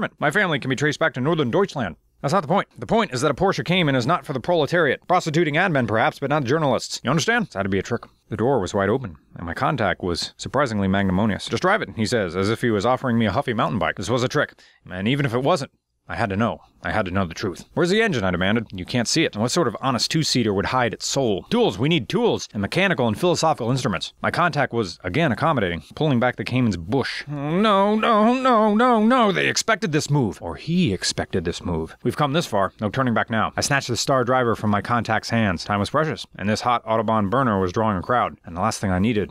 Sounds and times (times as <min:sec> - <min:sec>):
Speech: 0:00.0 - 0:39.3.